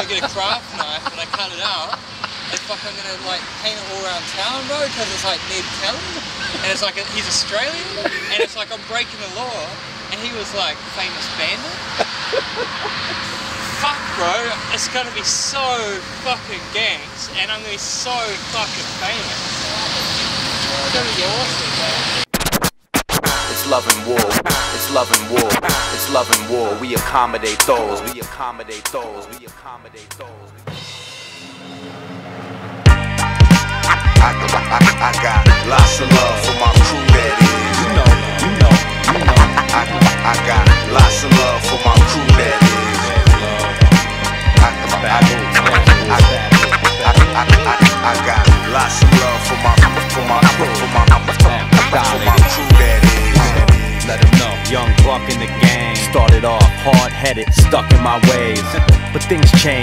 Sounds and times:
Speech: 0:00.0 - 0:22.2, 0:23.6 - 0:30.6, 0:35.6 - 0:43.9, 0:44.6 - 0:59.8
Music: 0:22.3 - 0:59.8.

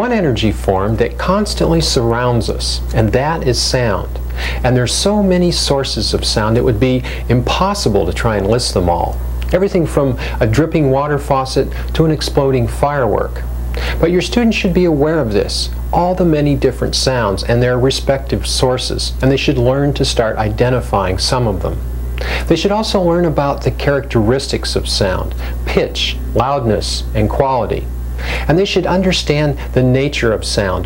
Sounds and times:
Speech: 0:00.0 - 0:21.8, 0:22.5 - 0:27.9, 0:28.5 - 0:30.8.

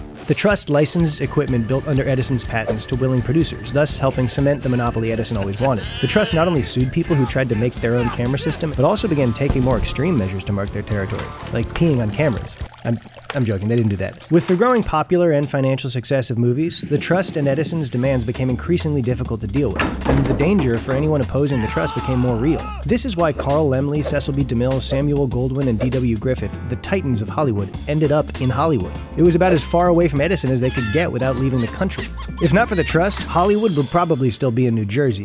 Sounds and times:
Music: 0:00.0 - 0:12.7, 0:16.4 - 0:35.2
Speech: 0:00.3 - 0:35.2.

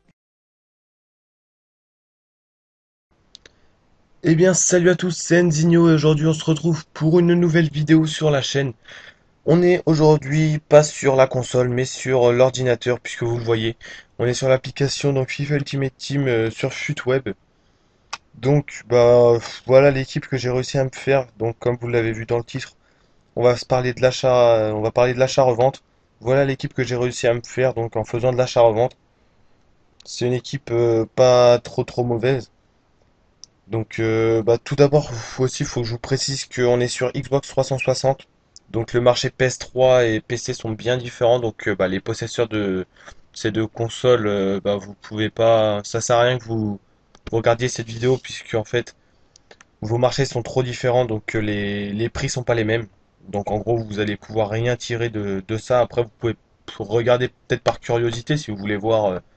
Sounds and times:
Speech: 0:04.2 - 0:08.8, 0:09.5 - 0:17.4, 0:18.2 - 0:22.8, 0:23.4 - 0:29.0, 0:30.0 - 0:32.5, 0:33.7 - 0:48.9, 0:49.5 - 0:59.2.

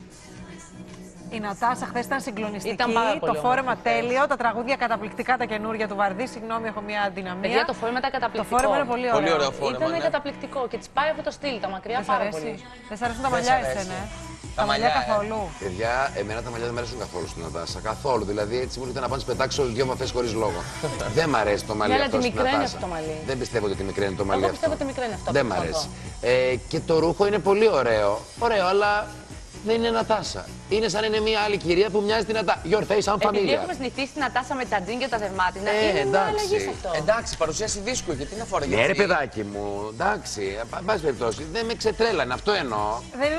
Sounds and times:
Television: 0:00.0 - 0:29.3, 0:31.3 - 0:43.3
Music: 0:00.0 - 0:43.3.

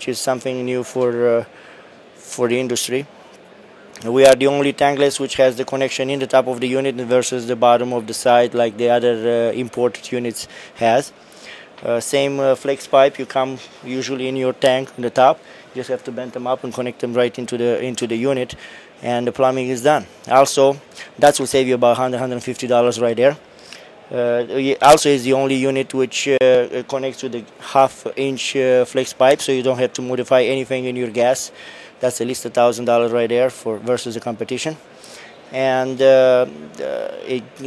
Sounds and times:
Speech: 0:00.0 - 0:01.5, 0:02.2 - 0:03.1, 0:04.0 - 0:11.1, 0:11.8 - 0:23.4, 0:24.1 - 0:34.8, 0:35.5 - 0:37.6.

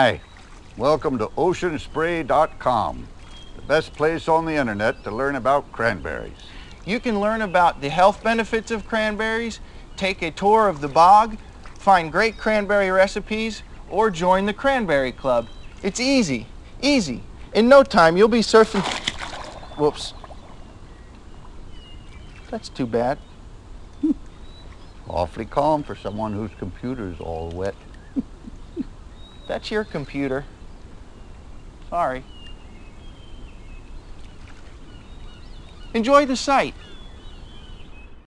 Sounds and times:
Speech: 0:00.0 - 0:00.2, 0:00.8 - 0:19.0, 0:19.8 - 0:20.2, 0:22.5 - 0:23.2, 0:25.0 - 0:27.8, 0:29.5 - 0:30.5, 0:31.9 - 0:32.3, 0:35.9 - 0:36.8.

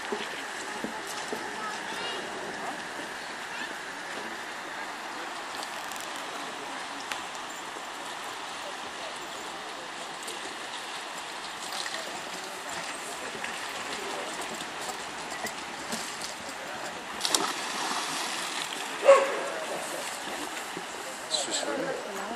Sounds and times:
Stream: 0:00.0 - 0:22.3
Bow-wow: 0:19.0 - 0:19.5.

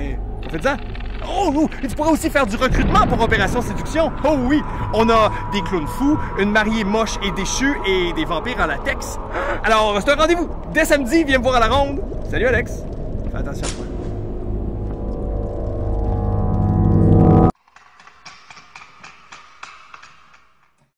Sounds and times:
Speech: 0:00.0 - 0:13.8.

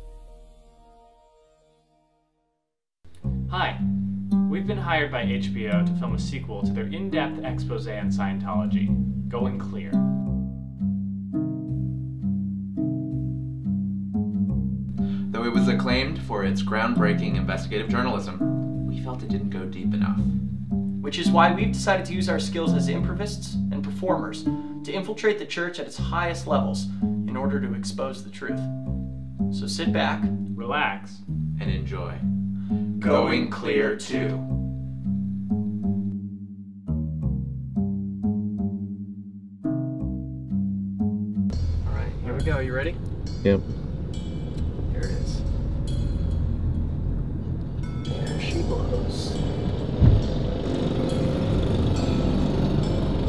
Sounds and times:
Speech: 0:03.5 - 0:03.8, 0:04.5 - 0:10.0, 0:15.3 - 0:20.3, 0:21.0 - 0:28.6, 0:29.6 - 0:32.2, 0:33.0 - 0:34.4, 0:41.9 - 0:43.6, 0:45.0 - 0:45.4, 0:48.1 - 0:49.4.

